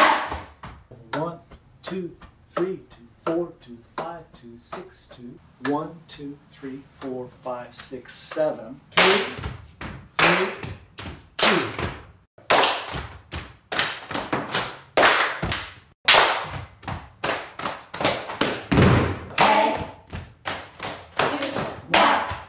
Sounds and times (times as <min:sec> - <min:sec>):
Speech: 0:01.0 - 0:09.4, 0:19.4 - 0:19.9.